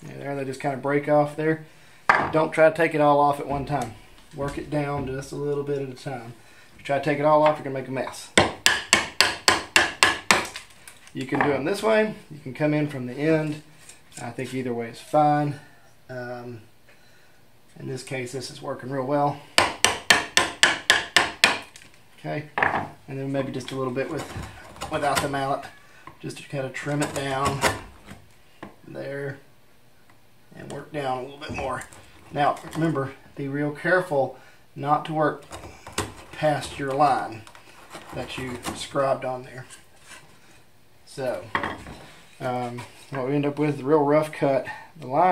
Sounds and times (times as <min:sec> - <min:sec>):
Wood: 0:23.6 - 0:25.5.